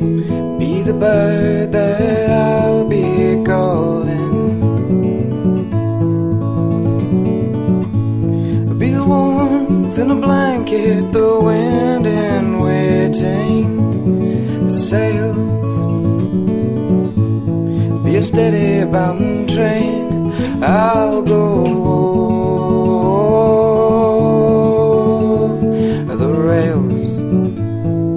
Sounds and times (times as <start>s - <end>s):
Music: 0.0s - 28.1s.